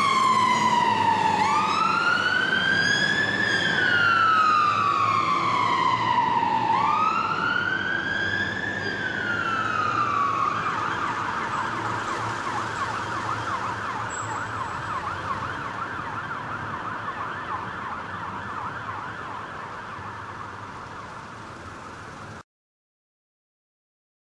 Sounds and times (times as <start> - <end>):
Fire engine, fire truck (siren): 0.0 - 22.4.